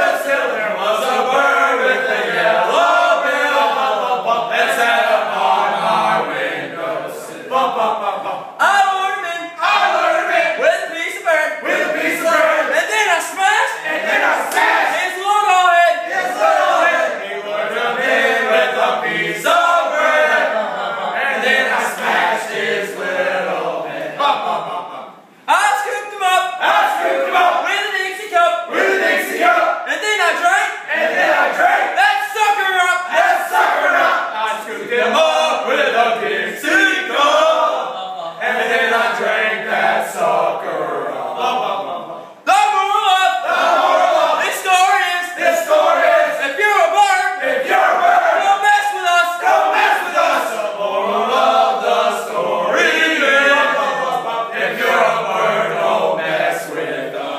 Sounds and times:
Speech: 0:00.0 - 0:57.3.

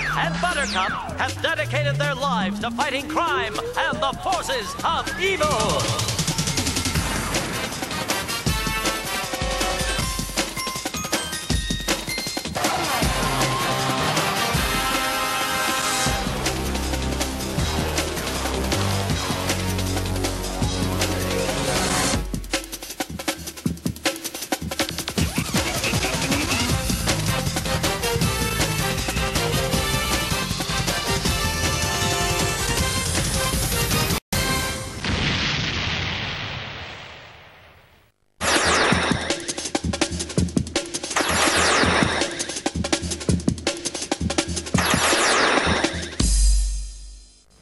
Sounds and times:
Music: 0:00.0 - 0:35.0, 0:39.0 - 0:47.6
Speech: 0:00.1 - 0:06.1.

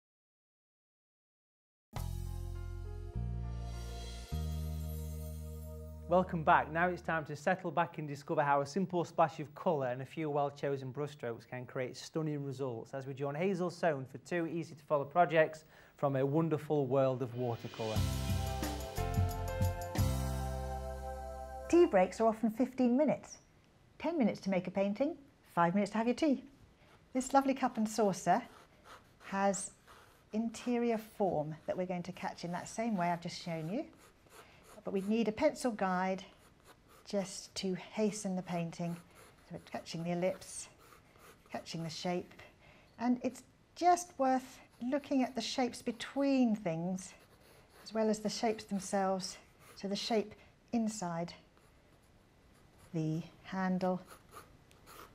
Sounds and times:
Speech: 0:06.1 - 0:18.0, 0:21.7 - 0:23.4, 0:24.0 - 0:26.5, 0:27.2 - 0:28.6, 0:29.3 - 0:29.8, 0:30.4 - 0:33.9, 0:34.8 - 0:36.3, 0:37.1 - 0:40.8, 0:41.5 - 0:47.2, 0:47.9 - 0:51.5, 0:53.0 - 0:54.1.

